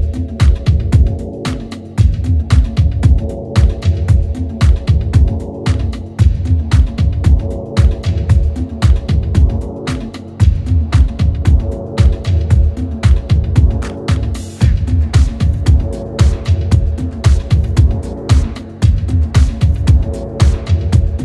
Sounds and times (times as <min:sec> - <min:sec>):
Disco: 0:00.0 - 0:21.2.